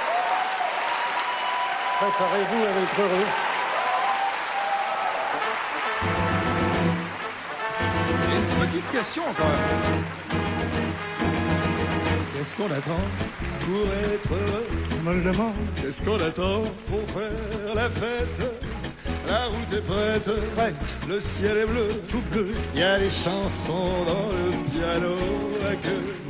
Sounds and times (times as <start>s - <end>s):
Music: 5.2s - 26.2s.